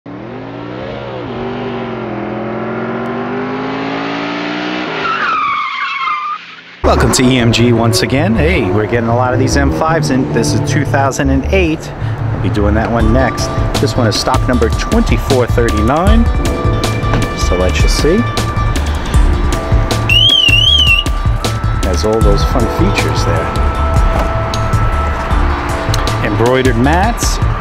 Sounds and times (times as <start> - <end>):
Car: 0.1 - 27.6
Speech: 6.9 - 16.3, 21.8 - 23.5, 26.2 - 27.4.